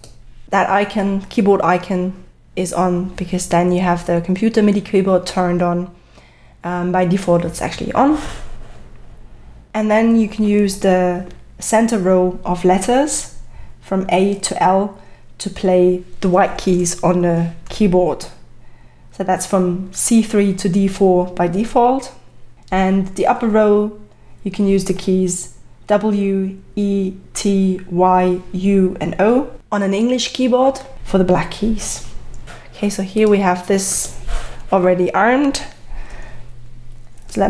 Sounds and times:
Speech: 0.5s - 6.0s, 6.6s - 8.4s, 9.7s - 18.4s, 19.2s - 32.2s, 32.8s - 35.8s, 37.3s - 37.5s.

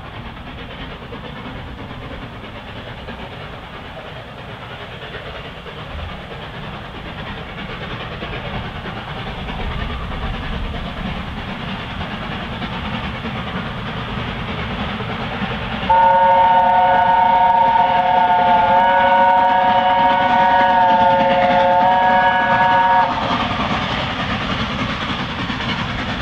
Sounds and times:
Steam whistle: 15.9s - 23.4s.

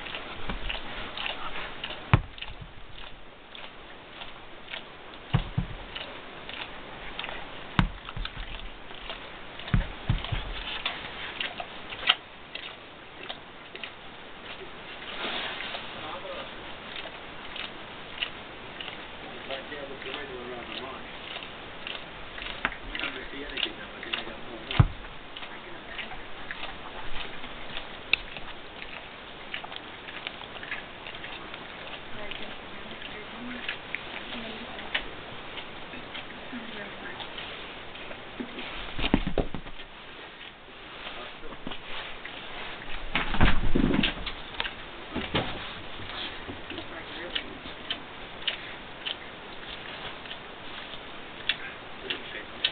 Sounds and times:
Speech: 16.0s - 16.5s, 19.2s - 21.1s, 22.9s - 24.8s, 25.5s - 26.5s, 36.5s - 37.3s, 46.7s - 47.9s, 51.6s - 52.6s.

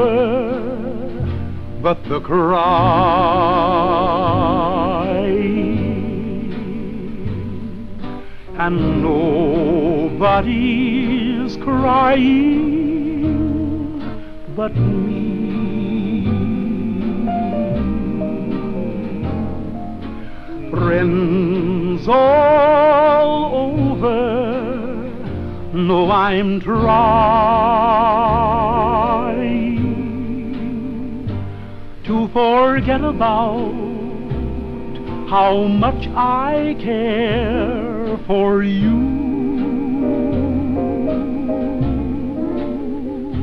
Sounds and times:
Music: 0.0s - 43.4s.

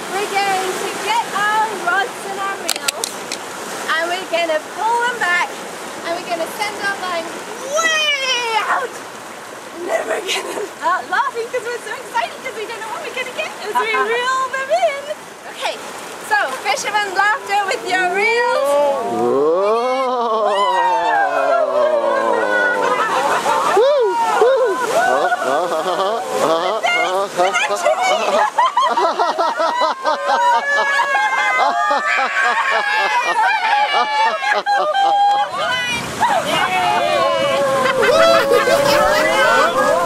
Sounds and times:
Snicker: 24.5s - 35.4s, 37.6s - 40.0s.

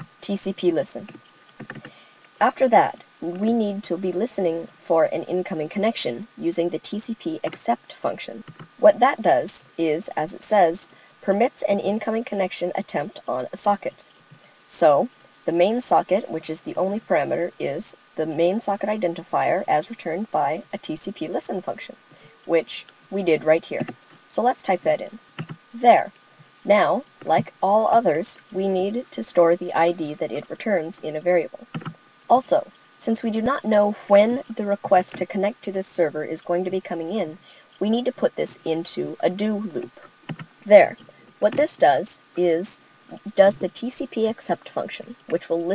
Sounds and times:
Narration, monologue: 0.0s - 45.7s.

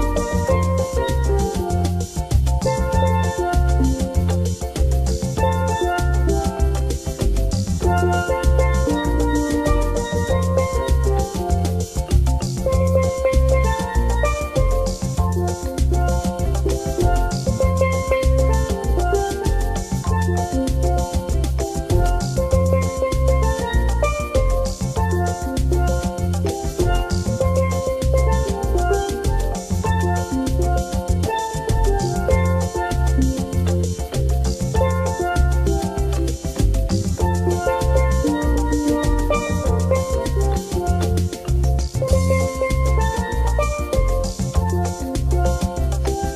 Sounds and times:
Musical instrument: 0.0s - 46.3s.

